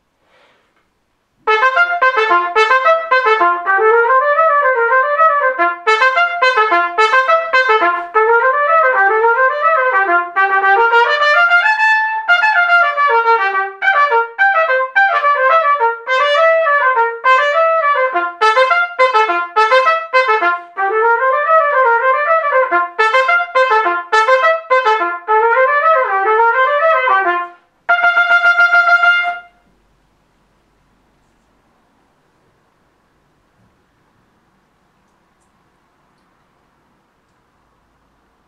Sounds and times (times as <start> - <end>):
Trumpet: 1.4 - 29.8.